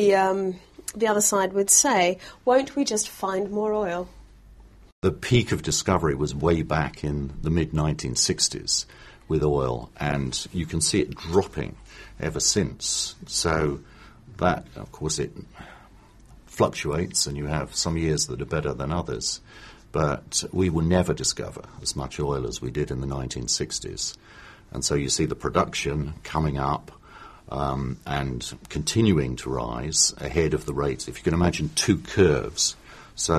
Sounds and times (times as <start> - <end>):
Speech: 0.0 - 4.1, 5.0 - 15.6, 16.5 - 33.3.